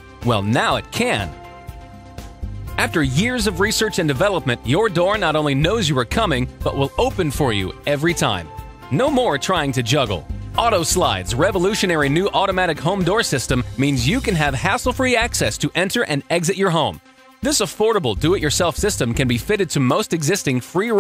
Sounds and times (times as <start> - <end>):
Music: 0.0 - 21.0
Speech: 0.2 - 1.4, 2.8 - 21.0.